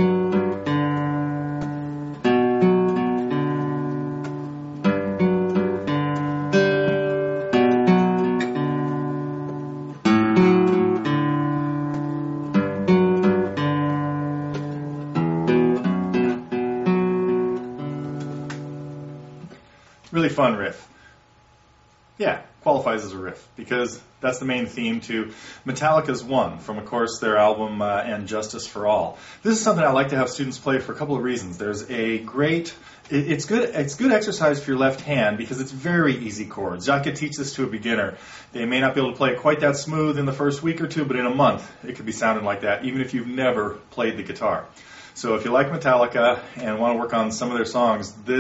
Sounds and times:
Acoustic guitar: 0:00.0 - 0:20.1
Strum: 0:00.0 - 0:20.1
Speech: 0:20.1 - 0:20.9, 0:22.2 - 0:48.4.

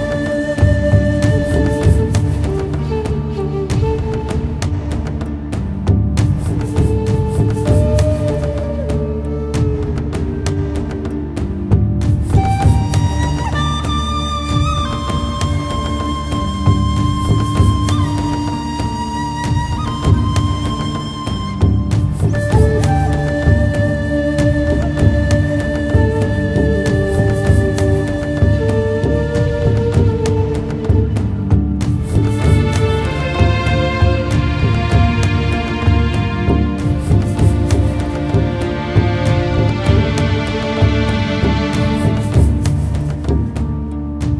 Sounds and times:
Music: 0:00.0 - 0:44.3.

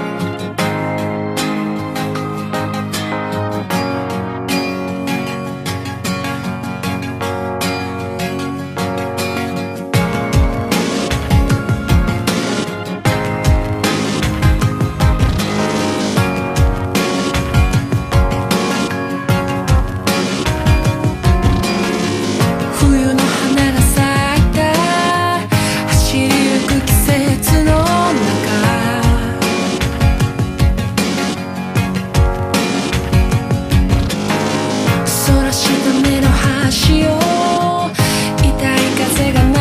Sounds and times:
Music: 0:00.0 - 0:39.6.

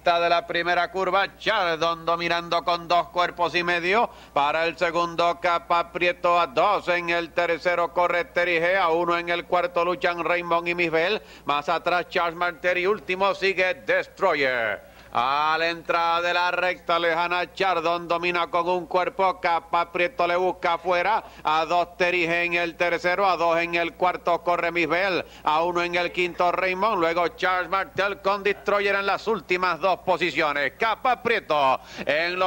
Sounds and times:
Speech: 0:00.0 - 0:32.4.

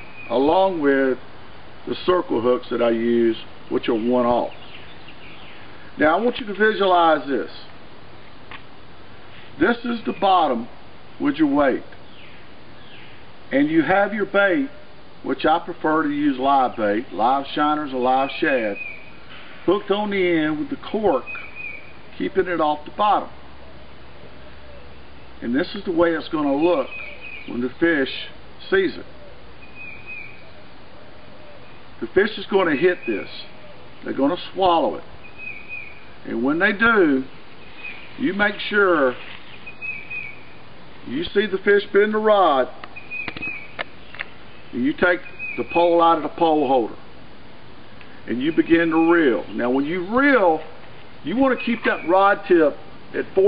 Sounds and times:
Outside, rural or natural: 0:00.0 - 0:53.4
Speech: 0:00.3 - 0:01.2, 0:01.9 - 0:04.6, 0:06.0 - 0:07.7, 0:09.6 - 0:11.9, 0:13.5 - 0:18.8, 0:19.7 - 0:21.3, 0:22.2 - 0:23.3, 0:25.4 - 0:26.9, 0:27.5 - 0:29.1, 0:32.0 - 0:35.1, 0:36.2 - 0:37.3, 0:38.2 - 0:39.2, 0:41.0 - 0:42.8, 0:44.7 - 0:47.0, 0:48.3 - 0:53.4.

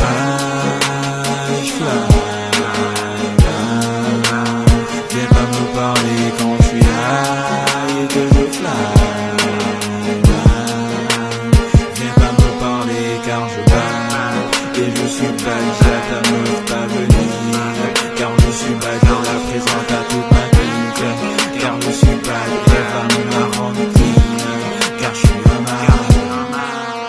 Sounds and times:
Pop music: 0:00.0 - 0:27.0.

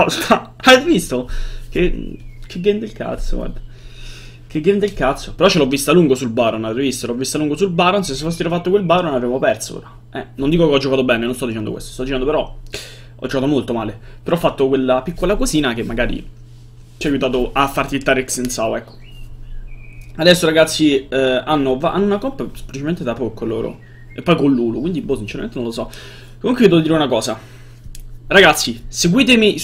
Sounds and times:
Speech: 0:00.0 - 0:03.6, 0:04.5 - 0:12.6, 0:13.2 - 0:16.3, 0:17.0 - 0:18.9, 0:20.2 - 0:27.4, 0:28.3 - 0:29.6.

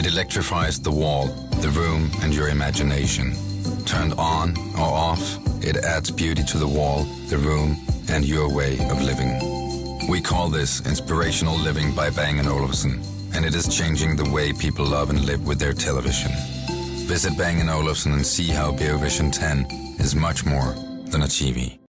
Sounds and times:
Speech: 0:00.0 - 0:09.4, 0:10.0 - 0:16.4, 0:17.1 - 0:21.8
Music: 0:00.0 - 0:21.8.

